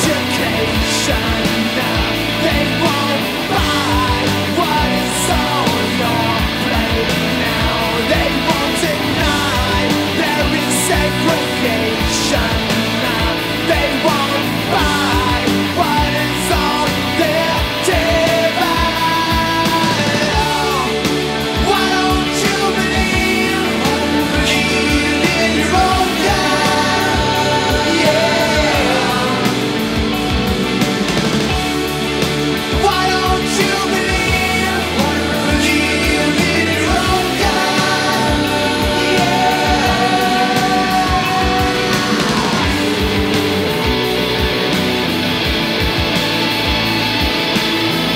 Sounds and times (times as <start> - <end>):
Singing: 0.0 - 30.2, 32.7 - 43.8
Punk rock: 0.0 - 48.1.